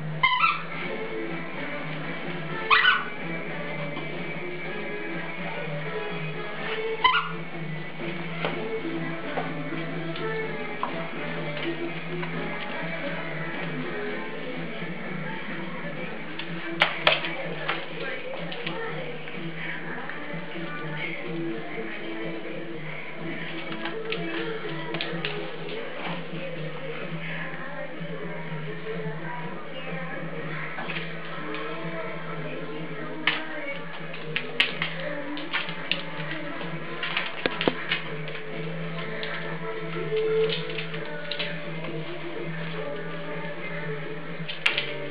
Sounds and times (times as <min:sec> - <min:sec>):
Music: 0:00.0 - 0:45.1.